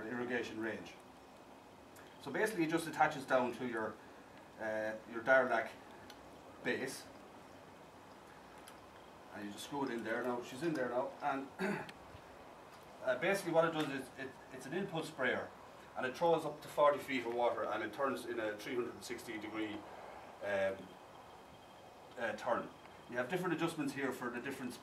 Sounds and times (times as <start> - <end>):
Speech: 0.0 - 1.0, 2.2 - 4.0, 4.6 - 5.8, 6.6 - 7.1, 9.3 - 11.8, 13.0 - 19.8, 20.4 - 20.9, 22.2 - 24.8.